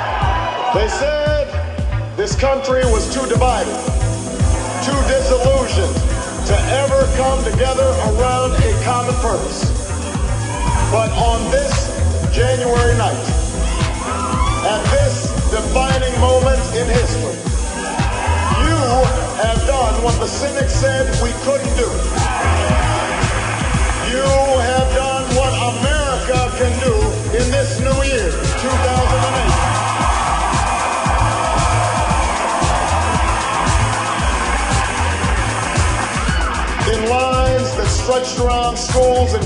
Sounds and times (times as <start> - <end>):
Music: 0.0 - 39.4
Male speech, man speaking: 0.8 - 1.6, 2.2 - 3.8, 4.8 - 9.7, 10.9 - 13.4, 14.6 - 17.4, 18.6 - 22.0, 24.0 - 29.6, 36.8 - 39.4
Narration, monologue: 0.8 - 13.6, 14.5 - 17.7, 18.5 - 22.3, 23.5 - 29.8, 36.8 - 39.4.